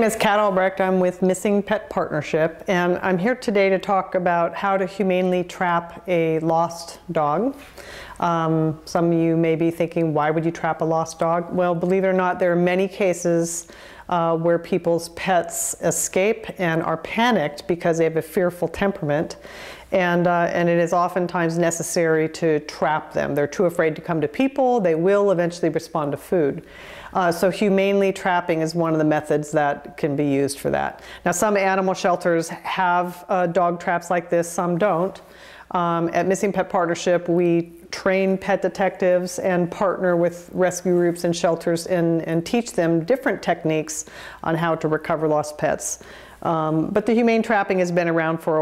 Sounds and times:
Speech: 0.0s - 7.6s, 8.2s - 19.4s, 20.0s - 26.6s, 27.2s - 48.6s.

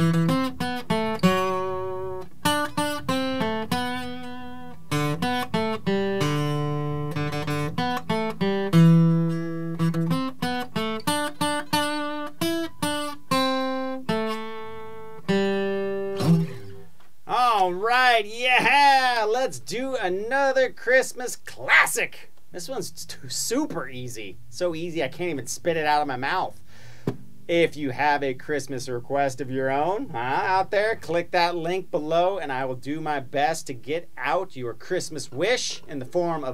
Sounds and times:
Strum: 0.0s - 17.2s.

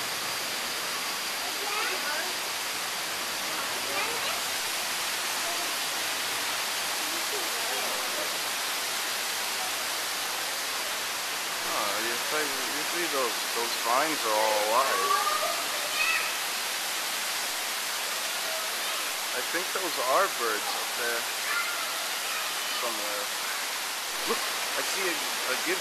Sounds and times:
Rain on surface: 0.0s - 25.8s
Speech: 11.6s - 15.7s, 19.4s - 21.2s, 22.8s - 23.3s, 24.2s - 25.8s.

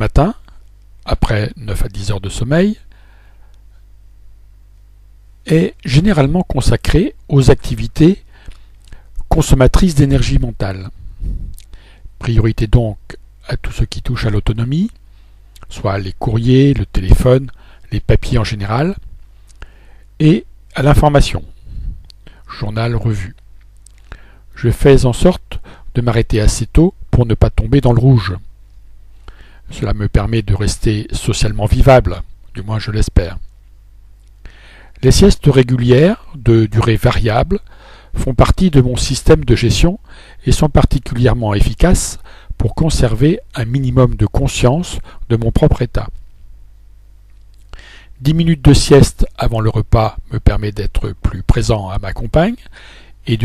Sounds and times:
Speech: 0.0s - 2.9s, 5.4s - 8.2s, 9.3s - 11.0s, 12.2s - 15.0s, 15.6s - 19.0s, 20.2s - 21.5s, 22.5s - 23.4s, 24.6s - 28.5s, 29.7s - 33.5s, 35.0s - 46.2s, 48.2s - 53.4s.

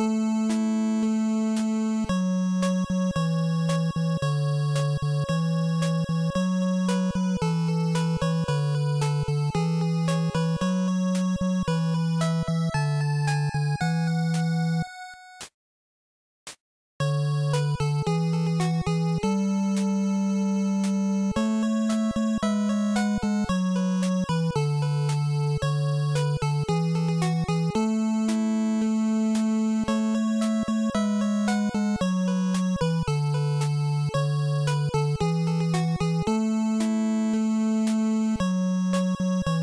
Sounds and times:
Video game music: 0.0s - 15.5s, 17.0s - 39.6s.

